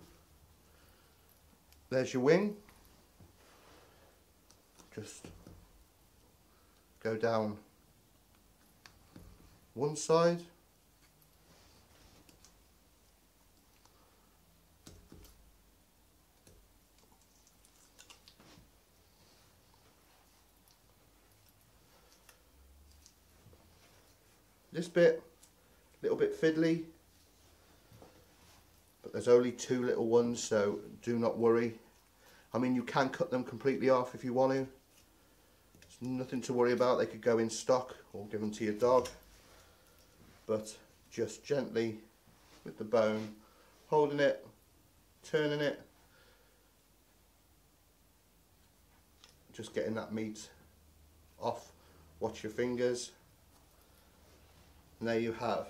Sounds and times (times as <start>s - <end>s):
Inside, small room: 0.0s - 55.6s
Speech: 1.9s - 2.6s, 4.9s - 5.4s, 7.0s - 7.7s, 9.8s - 10.6s, 24.7s - 25.3s, 26.0s - 27.0s, 29.0s - 31.8s, 32.5s - 34.8s, 35.9s - 39.2s, 40.4s - 44.6s, 45.2s - 45.9s, 49.5s - 50.6s, 51.4s - 53.2s, 55.0s - 55.6s.